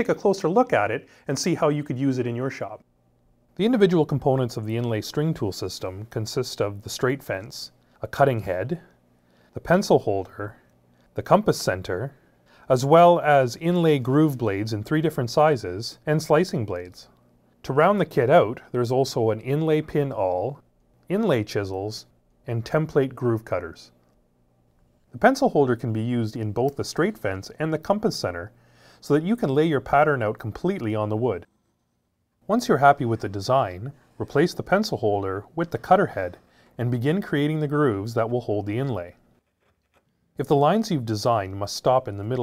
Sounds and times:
Speech: 0.0 - 2.9, 3.6 - 24.0, 25.1 - 31.5, 32.4 - 39.2, 40.4 - 42.4.

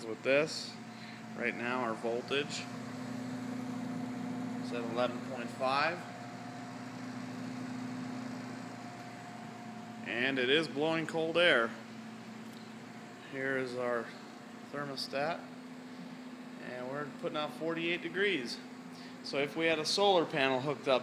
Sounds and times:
Speech: 0.0 - 0.8, 1.4 - 2.7, 4.6 - 6.1, 10.1 - 11.8, 13.3 - 15.5, 16.6 - 21.0
Air conditioning: 0.0 - 21.0.

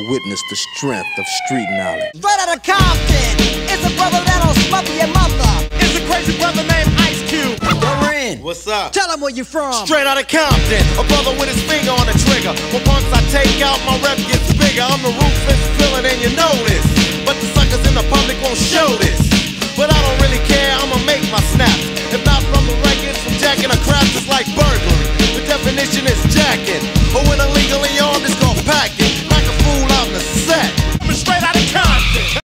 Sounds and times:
Music: 2.8 - 8.4, 9.7 - 32.4.

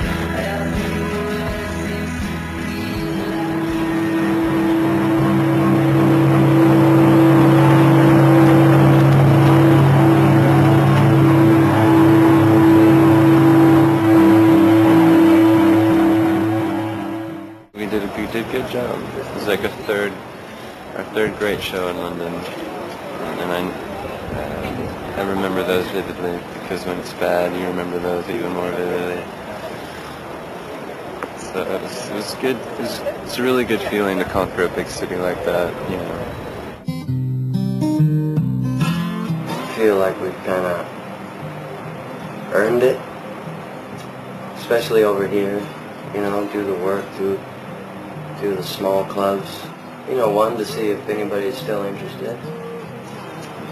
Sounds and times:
Speech: 17.8 - 20.2, 21.0 - 29.8, 31.4 - 36.3, 39.6 - 40.9, 42.5 - 43.0, 44.6 - 47.4, 48.4 - 52.5.

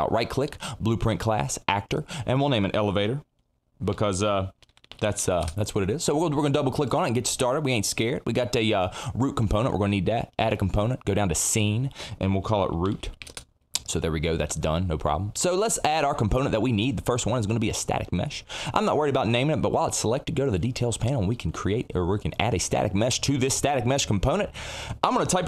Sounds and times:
Speech: 0.0 - 13.2, 13.8 - 25.4.

